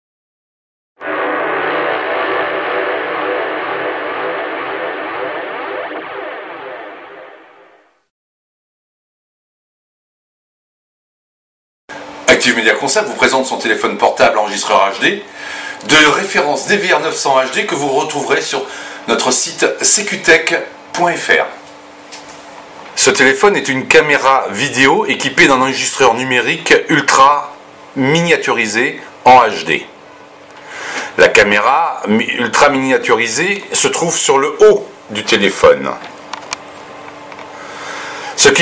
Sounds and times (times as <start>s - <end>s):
Speech: 12.2s - 21.6s, 23.0s - 30.0s, 31.2s - 36.1s, 38.4s - 38.6s.